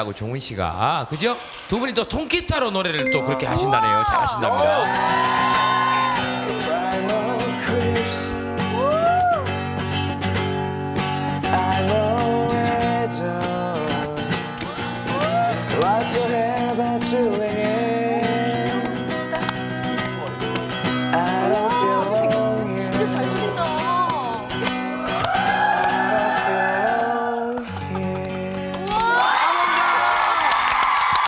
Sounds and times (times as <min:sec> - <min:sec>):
Music: 0:03.0 - 0:29.4.